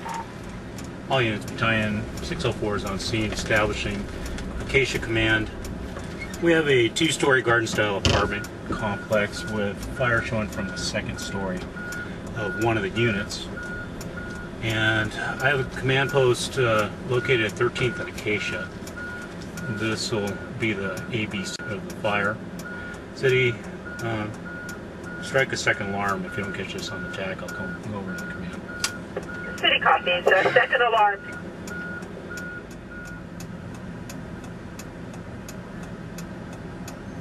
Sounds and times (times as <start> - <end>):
Speech: 1.1 - 4.1, 4.7 - 5.6, 6.4 - 11.7, 12.4 - 13.5, 14.6 - 18.7, 19.6 - 22.4, 23.2 - 24.4, 25.2 - 28.6, 29.6 - 31.3.